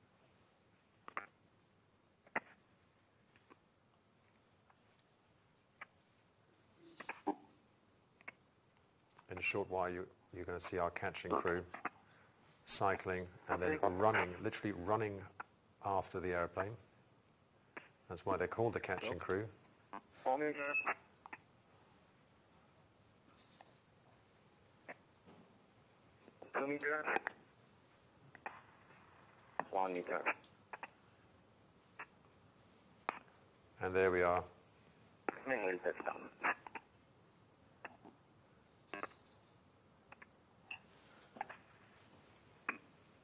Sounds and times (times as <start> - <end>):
Speech: 9.3 - 11.7, 12.6 - 16.8, 18.1 - 19.6, 26.6 - 27.2, 29.6 - 30.4, 33.8 - 34.6, 35.3 - 36.3.